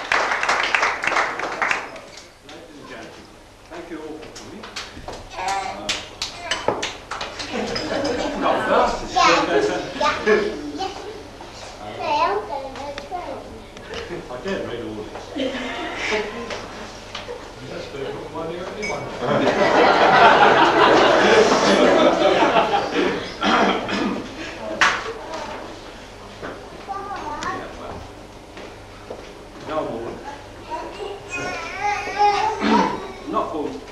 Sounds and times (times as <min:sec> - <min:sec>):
Male speech, man speaking: 0:01.4 - 0:04.8, 0:08.2 - 0:10.8, 0:11.8 - 0:12.2, 0:14.0 - 0:15.2, 0:17.6 - 0:19.5, 0:27.4 - 0:28.1, 0:29.6 - 0:30.3, 0:32.6 - 0:33.9.